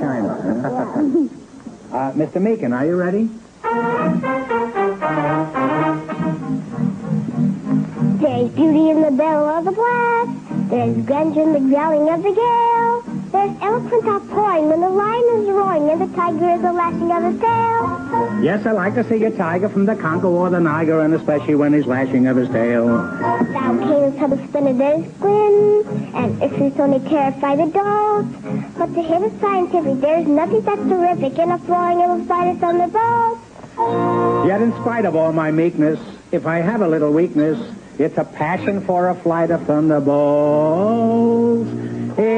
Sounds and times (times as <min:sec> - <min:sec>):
Music: 0:01.7 - 0:42.3
Speech: 0:34.5 - 0:40.1.